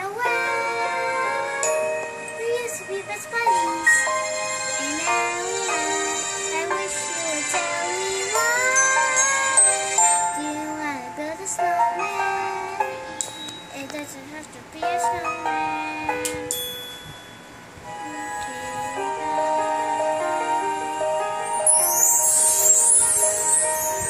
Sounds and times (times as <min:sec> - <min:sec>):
Child singing: 0:00.0 - 0:16.6, 0:18.0 - 0:24.0
Music: 0:00.0 - 0:24.0
Speech: 0:13.8 - 0:16.5.